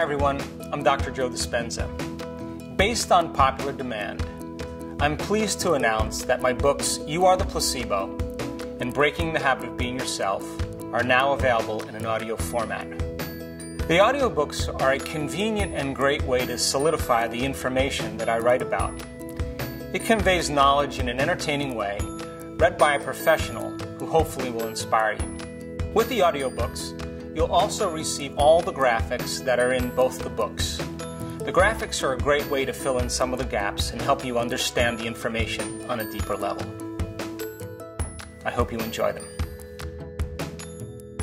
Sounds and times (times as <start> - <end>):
Speech: 0.0 - 2.0, 2.8 - 4.3, 5.0 - 8.1, 8.8 - 13.0, 13.9 - 19.0, 20.0 - 25.2, 26.0 - 30.8, 31.5 - 36.7, 38.4 - 39.3
Music: 0.0 - 41.2.